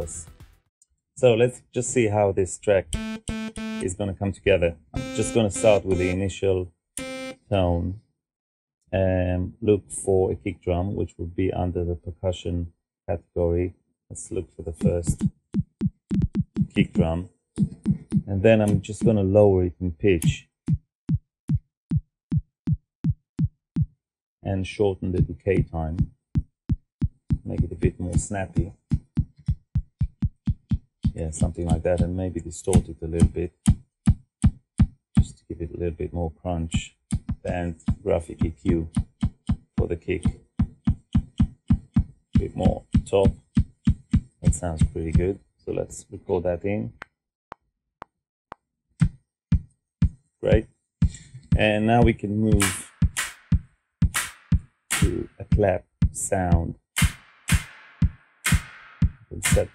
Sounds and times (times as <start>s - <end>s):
Speech: 0.0s - 0.3s, 1.2s - 3.0s, 3.8s - 6.7s, 7.4s - 8.0s, 8.9s - 15.2s, 16.8s - 17.3s, 18.3s - 20.5s, 24.4s - 26.0s, 27.5s - 28.8s, 31.2s - 33.6s, 35.2s - 38.9s, 39.8s - 40.4s, 42.4s - 43.4s, 44.4s - 47.0s, 50.4s - 50.7s, 51.6s - 52.9s, 55.0s - 56.8s, 59.3s - 59.7s.